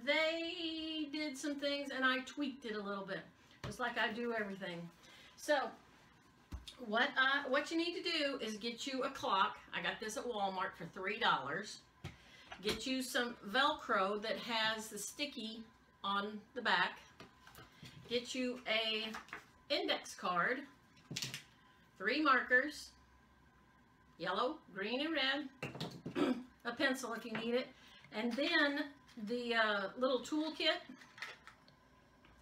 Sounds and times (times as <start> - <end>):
Speech: 0.0 - 5.8, 6.7 - 11.9, 12.6 - 17.0, 18.1 - 20.7, 22.0 - 23.0, 24.2 - 25.5, 26.6 - 31.0.